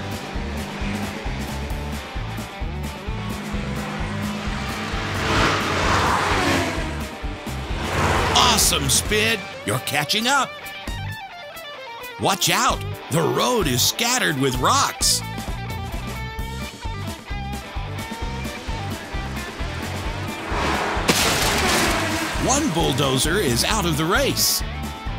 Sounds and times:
Race car, auto racing: 0.0s - 11.2s, 12.4s - 25.1s.

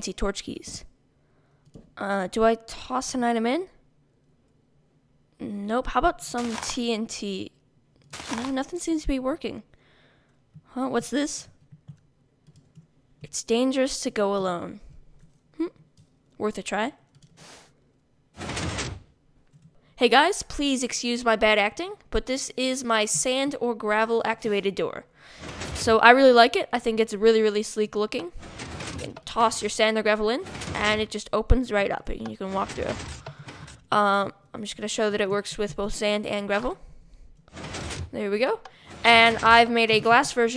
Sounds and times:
Speech: 0.0s - 0.9s, 2.0s - 3.8s, 5.4s - 7.5s, 8.3s - 9.7s, 10.7s - 11.5s, 13.2s - 14.8s, 16.4s - 17.0s, 20.0s - 25.1s, 25.8s - 28.4s, 29.0s - 33.1s, 33.9s - 36.8s, 38.1s - 40.5s
Sliding door: 8.2s - 8.6s, 17.4s - 17.7s, 18.4s - 19.1s, 25.3s - 26.2s, 28.2s - 31.2s, 32.2s - 33.9s, 37.5s - 40.5s.

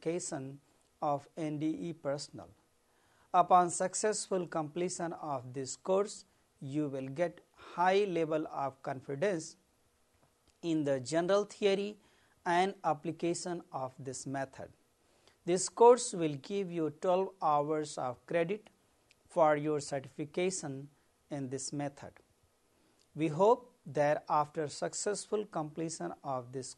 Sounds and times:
Speech: 0.0s - 2.6s, 3.4s - 9.6s, 10.6s - 14.8s, 15.4s - 22.2s, 23.2s - 26.7s.

